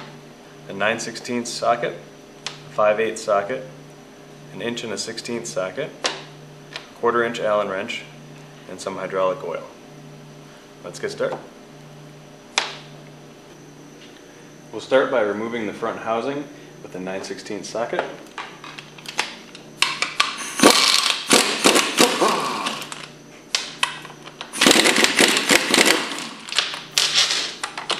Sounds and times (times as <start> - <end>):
Speech: 0.7 - 2.0, 2.7 - 3.7, 4.5 - 6.0, 7.0 - 9.8, 10.8 - 11.5, 14.7 - 18.2.